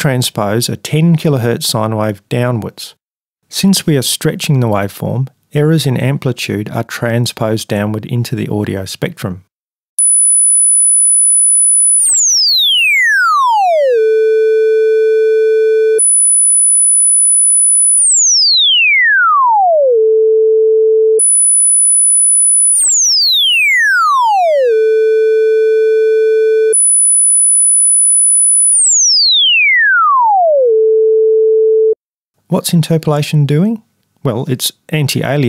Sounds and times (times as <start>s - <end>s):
Sampler: 10.0s - 18.7s, 21.2s - 29.6s.